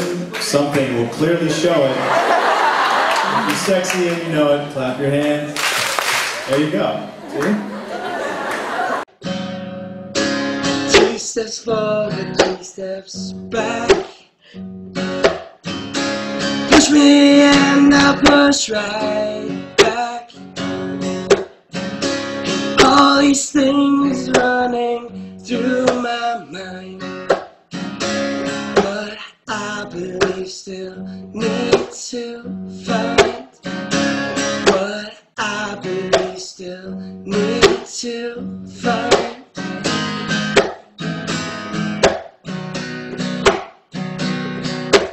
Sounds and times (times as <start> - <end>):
Music: 9.1 - 45.1
Male singing: 10.9 - 14.2, 16.7 - 20.4, 22.7 - 27.1, 28.8 - 33.6, 34.6 - 39.6.